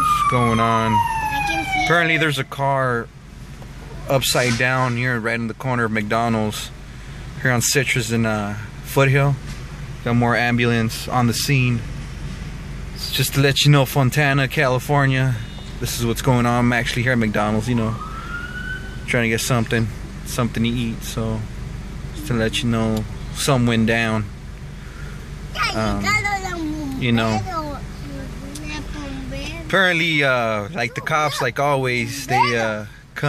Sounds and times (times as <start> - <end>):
Speech: 0.0 - 3.1, 4.1 - 6.7, 7.4 - 9.4, 10.1 - 11.8, 13.0 - 18.0, 19.1 - 21.5, 22.2 - 24.3, 25.6 - 33.2
Motor vehicle (road): 0.0 - 33.2.